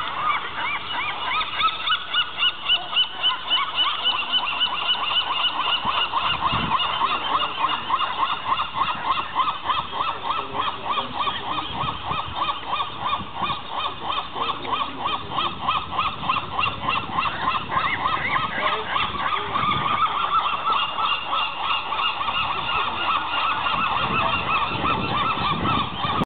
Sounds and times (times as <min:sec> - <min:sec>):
Speech: 0:05.9 - 0:26.2.